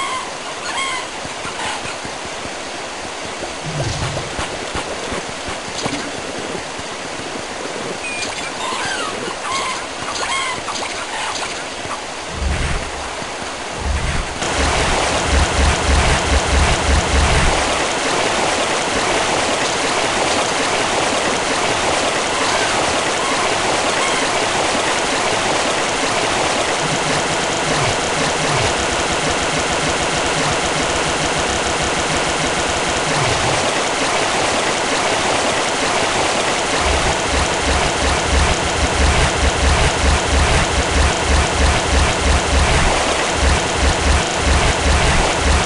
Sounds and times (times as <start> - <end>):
Stream: 0.0 - 45.6.